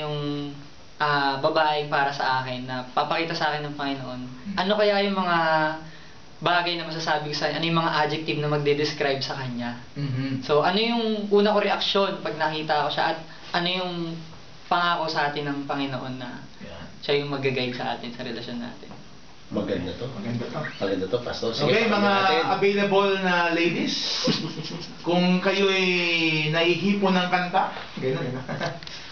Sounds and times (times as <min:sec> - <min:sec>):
Speech: 0:00.0 - 0:24.2.